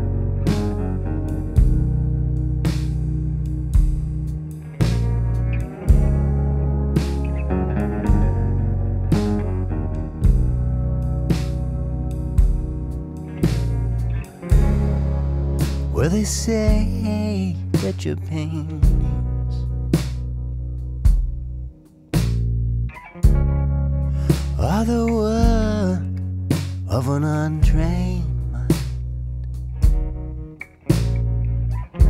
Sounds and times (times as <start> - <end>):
Bass guitar: 0.0 - 32.1.